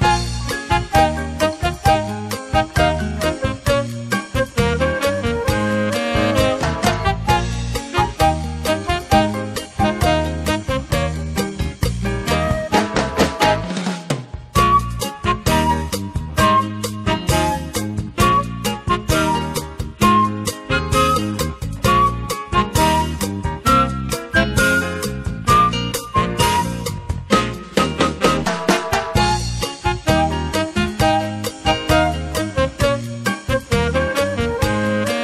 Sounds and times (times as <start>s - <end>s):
Music: 0.0s - 35.2s.